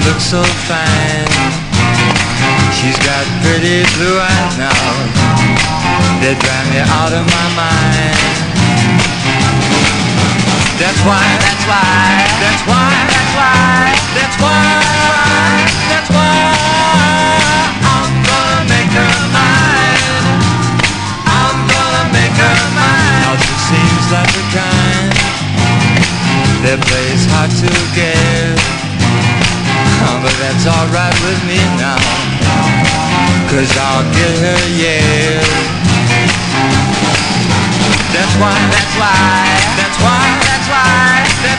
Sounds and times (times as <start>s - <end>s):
Music: 0.0s - 41.5s.